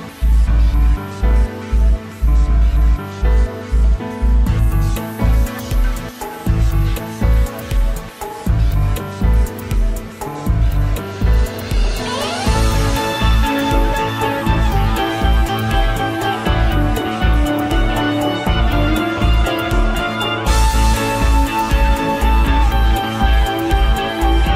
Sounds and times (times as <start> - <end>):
Music: 0.0 - 24.5.